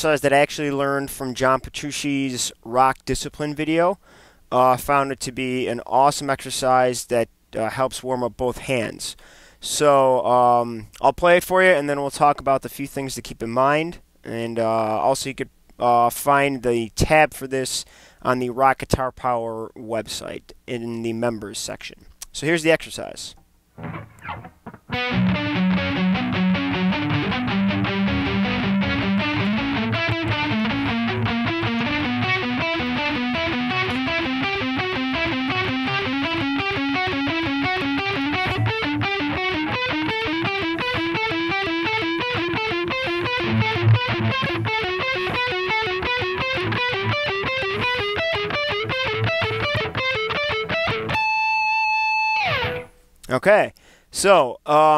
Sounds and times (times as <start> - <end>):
Speech: 0.0 - 23.4, 53.3 - 54.9.